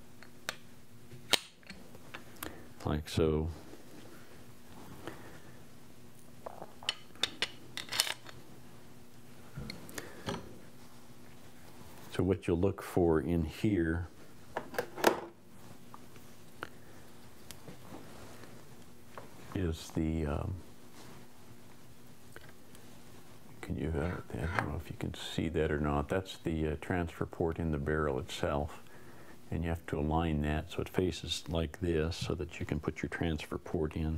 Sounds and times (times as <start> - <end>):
Speech: 2.8 - 3.6, 12.1 - 14.1, 19.5 - 20.6, 23.6 - 28.8, 29.5 - 34.1.